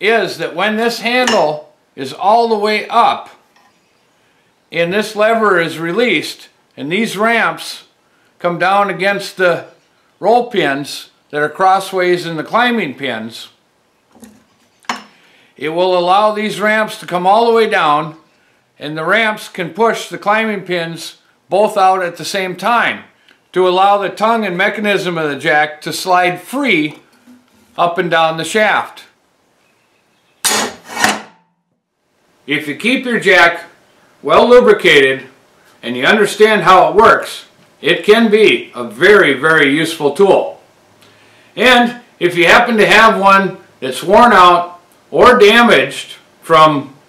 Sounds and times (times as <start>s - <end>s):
Speech: 0.0s - 3.4s, 4.7s - 13.6s, 15.6s - 18.2s, 18.8s - 27.0s, 27.8s - 29.2s, 32.5s - 40.6s, 41.6s - 47.0s.